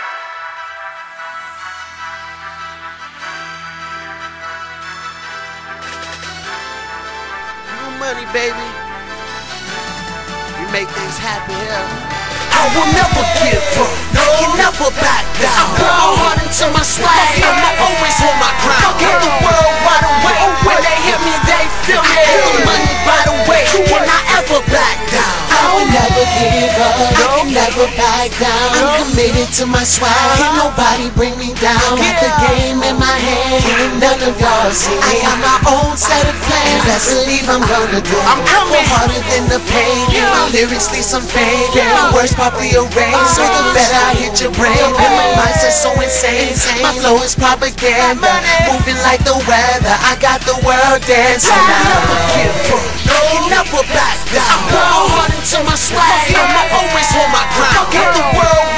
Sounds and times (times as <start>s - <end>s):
Soundtrack music: 0.0s - 58.7s.